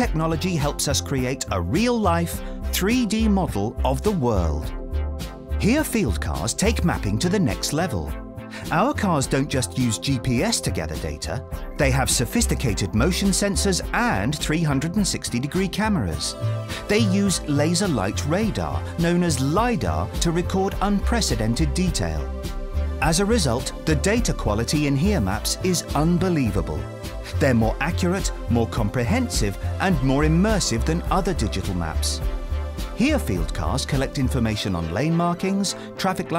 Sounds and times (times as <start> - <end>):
Speech: 0.0 - 4.7, 5.6 - 22.3, 23.0 - 32.2, 33.0 - 36.3
Music: 0.0 - 36.3.